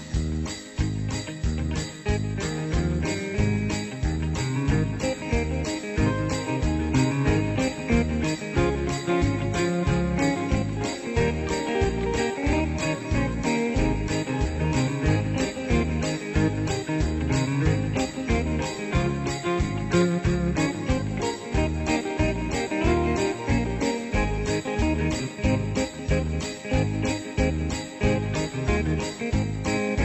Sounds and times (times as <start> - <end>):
Jingle bell: 0.0 - 30.0.